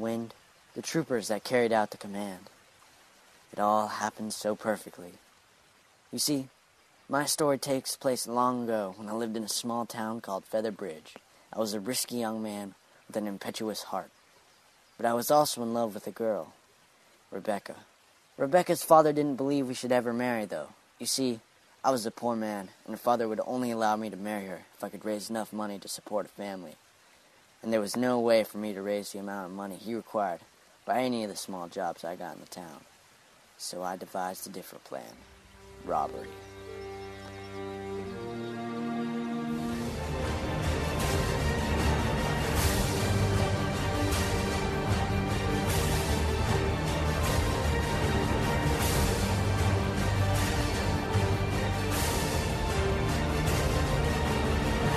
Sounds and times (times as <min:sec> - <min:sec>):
Speech: 0:00.0 - 0:02.5, 0:03.5 - 0:05.2, 0:06.1 - 0:06.5, 0:07.1 - 0:14.1, 0:15.0 - 0:16.6, 0:17.3 - 0:26.8, 0:27.6 - 0:32.9, 0:33.6 - 0:35.2, 0:35.8 - 0:36.4.